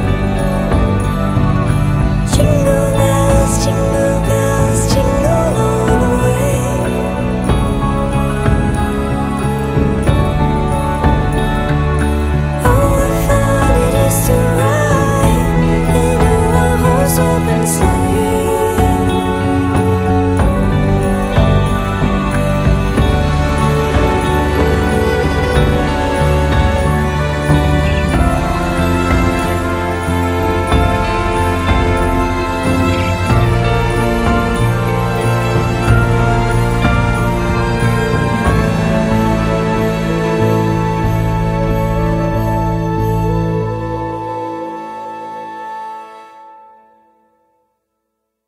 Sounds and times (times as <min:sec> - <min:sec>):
Music: 0:00.0 - 0:48.4.